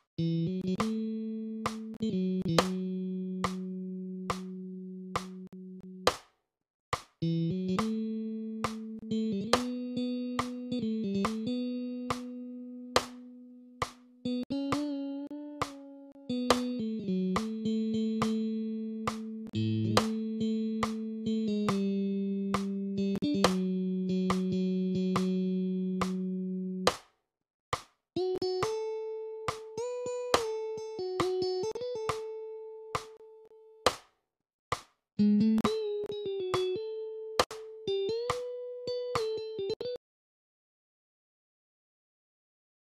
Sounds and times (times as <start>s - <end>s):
Bass guitar: 0.0s - 6.1s, 7.2s - 26.9s, 35.2s - 39.7s
Strum: 0.2s - 6.2s, 7.2s - 26.9s.